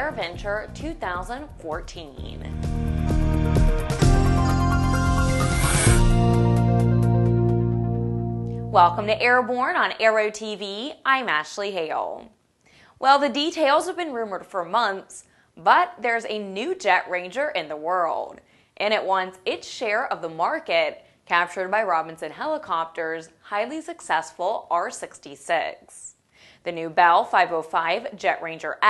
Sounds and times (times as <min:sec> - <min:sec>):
Speech: 0:00.0 - 0:02.6, 0:08.7 - 0:12.3, 0:13.0 - 0:28.8
Music: 0:00.0 - 0:09.3.